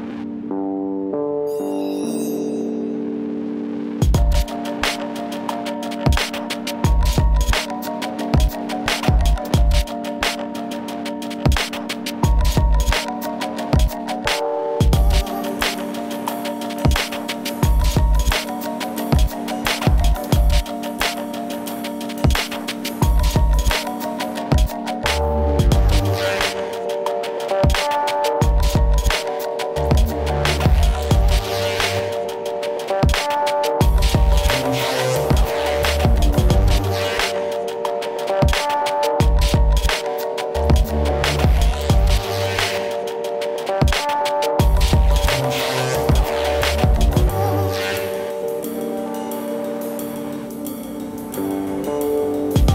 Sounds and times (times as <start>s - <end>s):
Music: 0.0s - 52.7s.